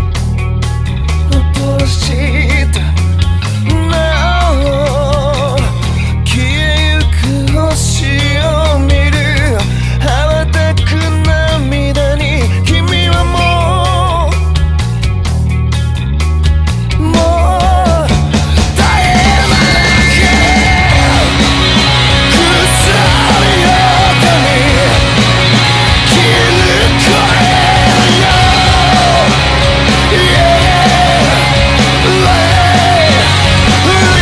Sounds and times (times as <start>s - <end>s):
Soundtrack music: 12.8s - 34.2s.